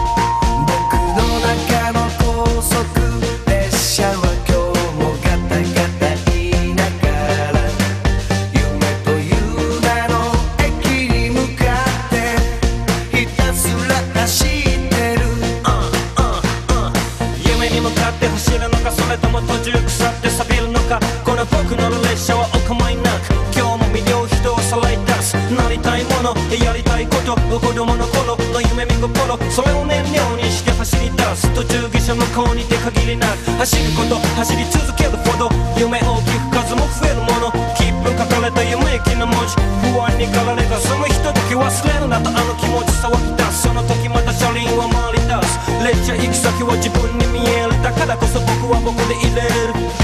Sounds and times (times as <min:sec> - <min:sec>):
Dance music: 0:00.0 - 0:50.0.